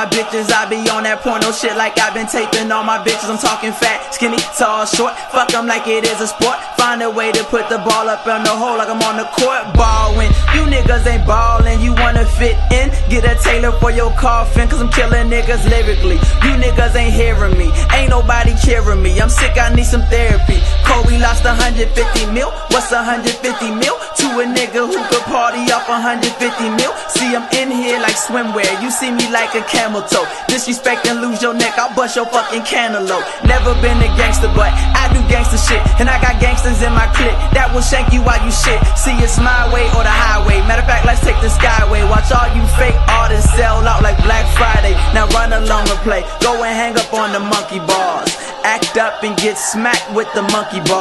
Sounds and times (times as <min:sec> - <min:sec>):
Music: 0:00.0 - 0:51.0.